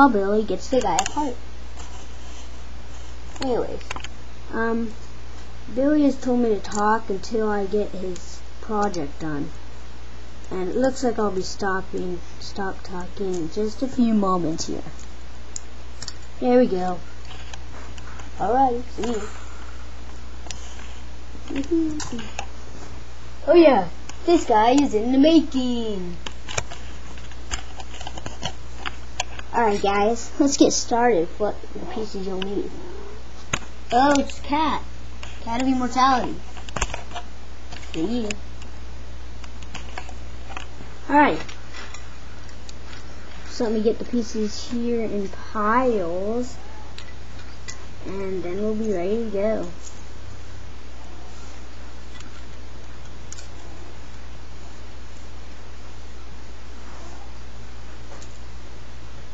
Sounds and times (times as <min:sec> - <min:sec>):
Speech: 0:00.0 - 0:01.4, 0:03.4 - 0:03.9, 0:04.5 - 0:05.0, 0:05.7 - 0:09.6, 0:10.5 - 0:15.0, 0:16.4 - 0:17.0, 0:18.4 - 0:19.4, 0:21.5 - 0:22.3, 0:23.4 - 0:26.2, 0:29.5 - 0:33.1, 0:33.9 - 0:36.4, 0:38.0 - 0:38.4, 0:41.1 - 0:41.5, 0:43.5 - 0:46.6, 0:48.0 - 0:49.8
Inside, small room: 0:00.0 - 0:59.3.